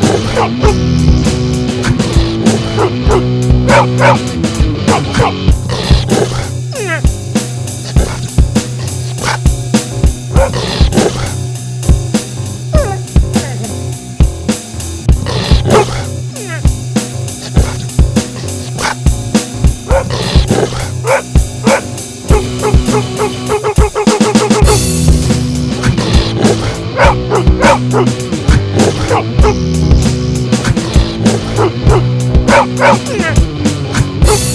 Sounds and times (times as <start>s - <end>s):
Music: 0.0s - 34.5s
Bow-wow: 0.1s - 0.8s, 2.8s - 4.2s, 10.4s - 11.4s, 15.7s - 16.1s, 19.9s - 20.1s, 21.1s - 24.8s, 26.5s - 29.6s, 31.6s - 33.0s.